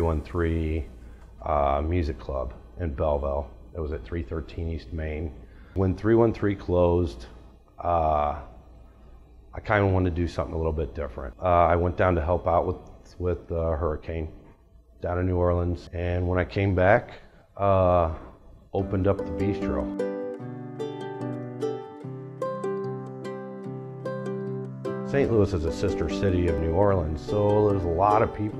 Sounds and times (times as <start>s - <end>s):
Speech: 0.0s - 8.5s, 9.6s - 14.4s, 15.0s - 19.9s, 25.1s - 28.5s.